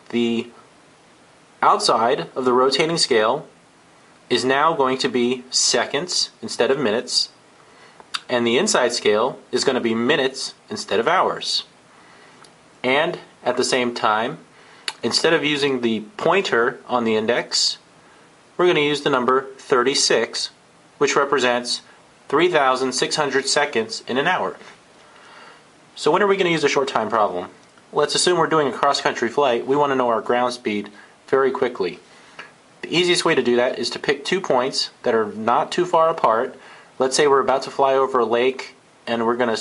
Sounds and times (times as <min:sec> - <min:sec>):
Speech: 0:00.0 - 0:00.6, 0:01.6 - 0:03.6, 0:04.3 - 0:07.4, 0:08.2 - 0:11.8, 0:12.8 - 0:17.9, 0:18.6 - 0:24.8, 0:26.0 - 0:32.0, 0:32.8 - 0:39.6.